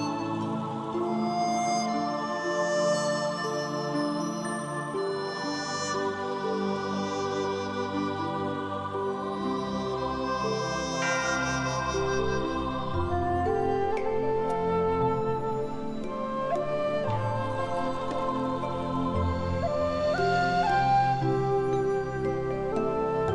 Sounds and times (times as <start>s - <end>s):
Music: 0.0s - 23.3s.